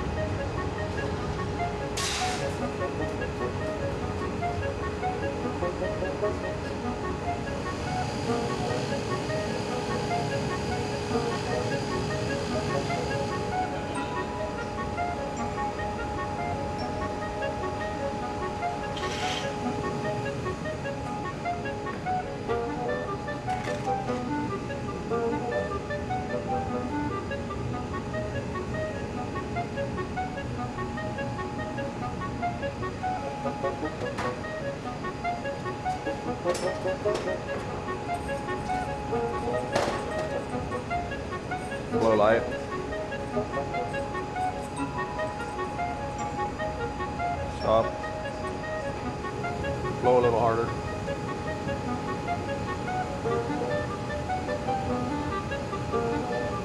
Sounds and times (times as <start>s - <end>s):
Music: 0.0s - 56.6s.